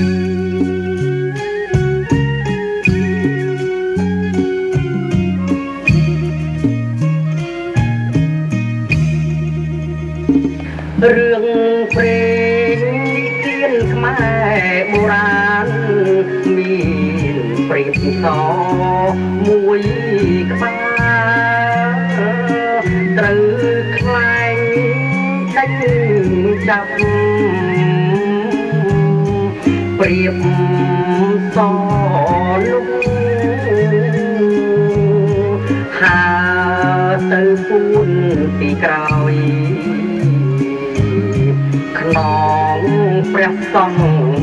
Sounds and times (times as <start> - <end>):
Traditional music: 0.0 - 44.4.